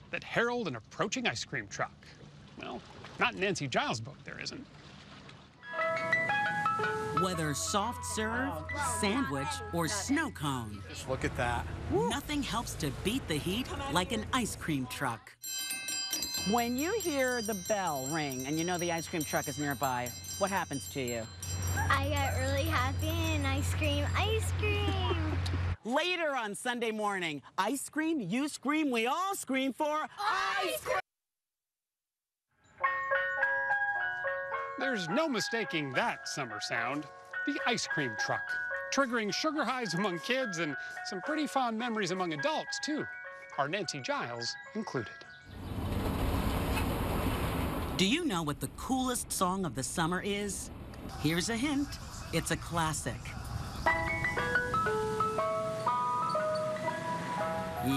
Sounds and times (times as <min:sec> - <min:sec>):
Ice cream truck, ice cream van: 0:05.6 - 0:25.8, 0:32.8 - 0:46.8, 0:51.2 - 0:57.9.